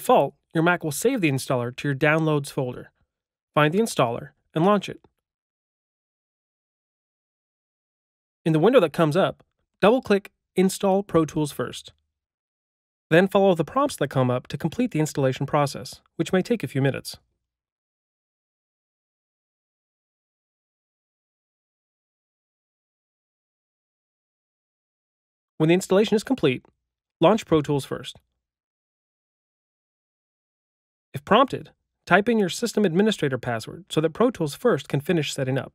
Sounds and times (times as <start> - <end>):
Speech: 0.0 - 3.0, 3.6 - 5.1, 8.5 - 11.9, 13.1 - 17.2, 25.6 - 26.6, 27.2 - 28.2, 31.2 - 35.7.